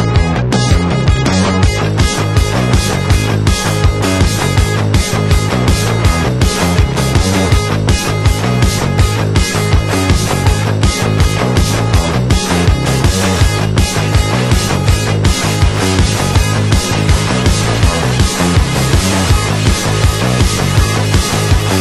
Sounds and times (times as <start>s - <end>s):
Music: 0.0s - 21.8s.